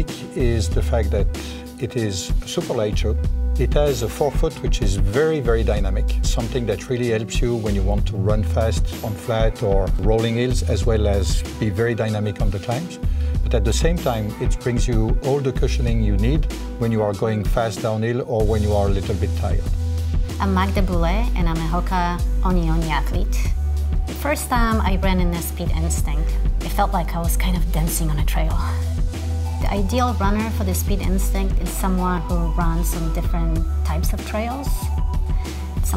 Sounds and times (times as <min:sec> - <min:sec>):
Speech: 0:00.0 - 0:19.7, 0:20.4 - 0:23.5, 0:24.2 - 0:28.8, 0:29.6 - 0:34.9
Music: 0:00.0 - 0:35.9.